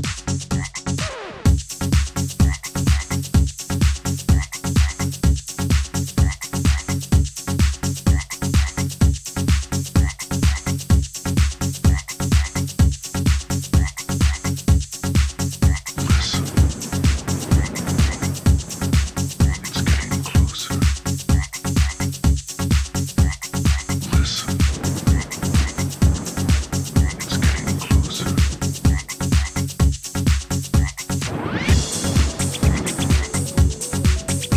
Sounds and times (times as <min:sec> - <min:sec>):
Croak: 0:00.5 - 0:00.9, 0:02.4 - 0:03.2, 0:04.3 - 0:05.1, 0:06.2 - 0:07.0, 0:08.1 - 0:08.8, 0:10.0 - 0:10.7, 0:11.9 - 0:12.6, 0:13.8 - 0:14.6, 0:15.6 - 0:22.2, 0:23.2 - 0:29.7, 0:30.8 - 0:31.1, 0:31.8 - 0:34.5.